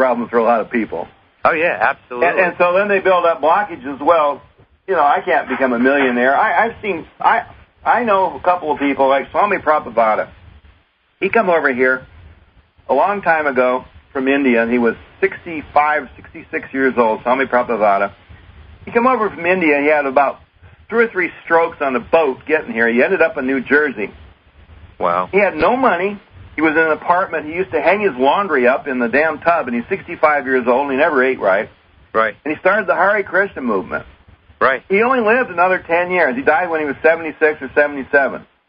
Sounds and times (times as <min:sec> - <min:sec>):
Speech: 0:00.0 - 0:10.3, 0:11.2 - 0:12.1, 0:12.9 - 0:18.2, 0:18.9 - 0:24.2, 0:25.0 - 0:38.5.